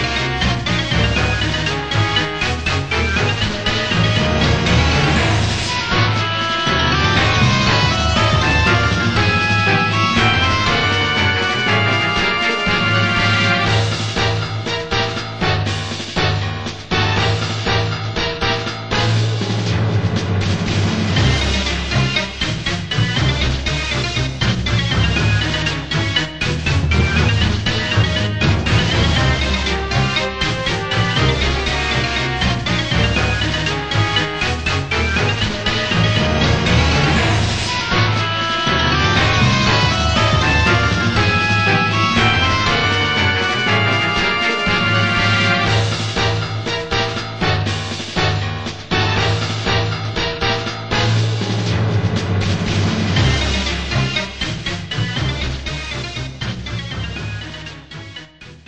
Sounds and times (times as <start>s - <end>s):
Music: 0.0s - 58.6s.